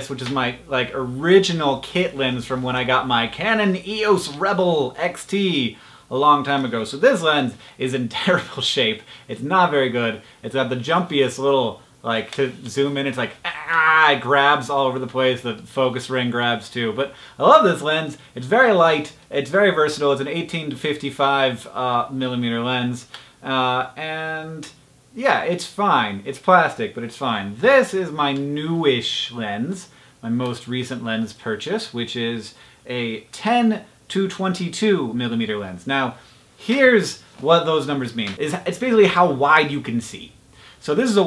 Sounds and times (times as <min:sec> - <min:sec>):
Speech: 0:00.0 - 0:41.2.